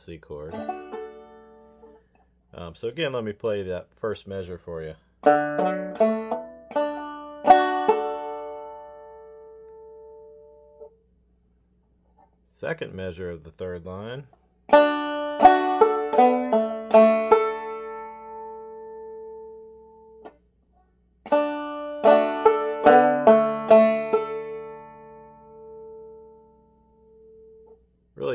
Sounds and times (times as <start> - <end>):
Speech: 0.0 - 0.6, 2.5 - 5.0, 12.5 - 14.3
Banjo: 0.3 - 2.2, 5.2 - 10.9, 14.7 - 20.4, 21.2 - 27.8.